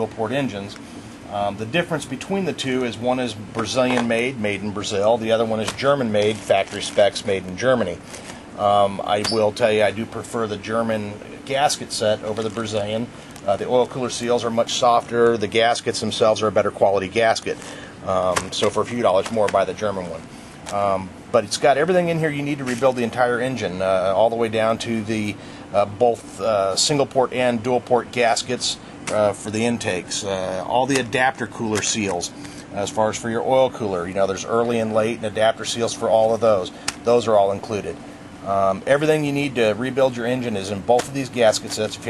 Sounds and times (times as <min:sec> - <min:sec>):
Speech: 0:00.0 - 0:08.0, 0:08.6 - 0:42.0.